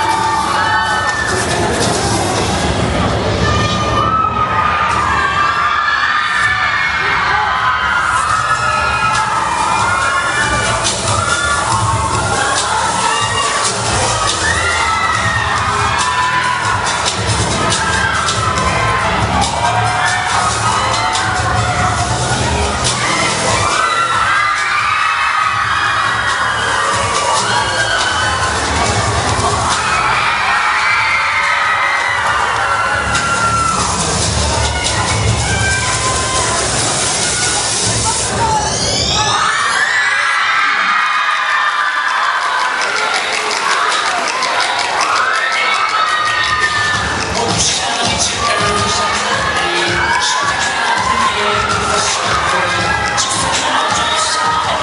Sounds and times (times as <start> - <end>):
Hip hop music: 0.0 - 39.8, 40.4 - 54.8.